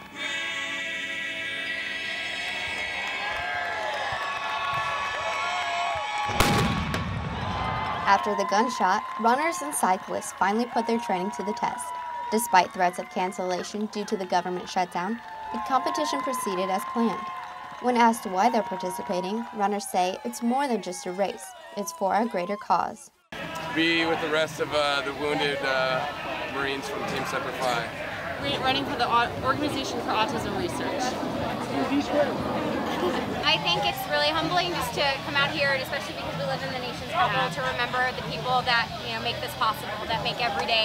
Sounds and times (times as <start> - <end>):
Outside, urban or manmade: 0.0 - 40.8.